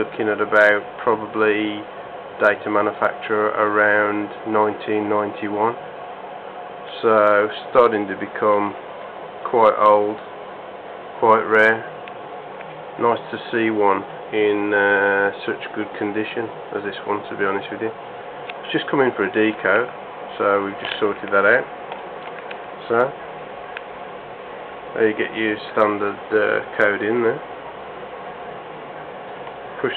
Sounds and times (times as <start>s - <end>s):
Speech: 0.0s - 5.8s, 6.9s - 8.8s, 9.4s - 10.2s, 11.2s - 11.9s, 13.0s - 18.0s, 18.6s - 21.7s, 22.8s - 23.2s, 25.0s - 27.5s, 29.8s - 29.9s.